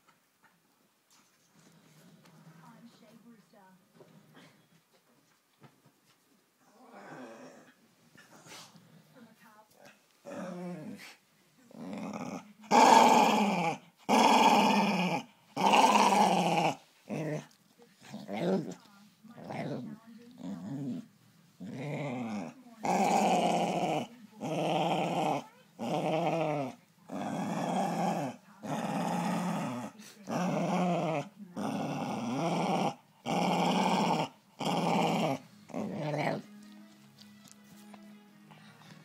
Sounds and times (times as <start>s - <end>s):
Inside, small room: 0.0s - 39.0s
Music: 35.4s - 39.0s.